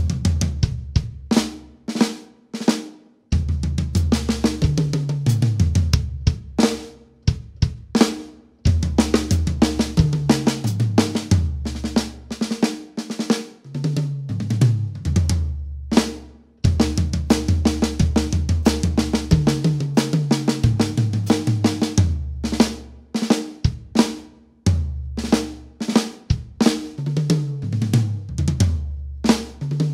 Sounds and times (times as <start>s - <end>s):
Drum: 0.0s - 29.9s
Drum kit: 0.0s - 29.9s.